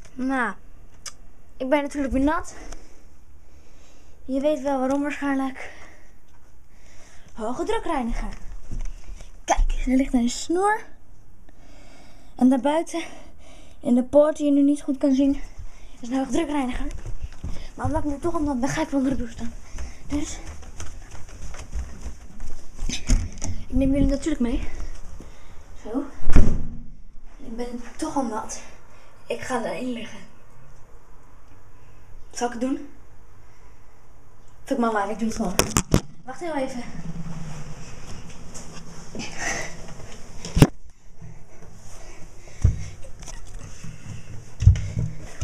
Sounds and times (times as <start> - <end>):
Speech: 1.6 - 2.6, 4.3 - 5.8, 7.4 - 8.4, 9.5 - 10.9, 16.0 - 17.0, 17.8 - 20.4, 23.7 - 24.8, 25.8 - 26.2, 27.4 - 28.7, 29.3 - 30.3, 32.4 - 33.0, 34.7 - 35.6, 36.3 - 37.0.